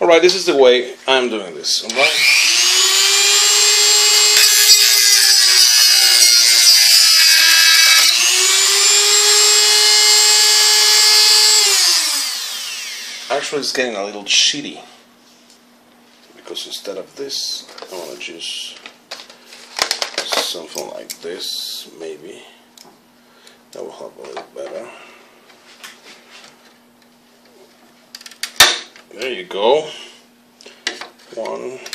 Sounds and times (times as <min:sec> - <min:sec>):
Drill: 0:01.9 - 0:13.5.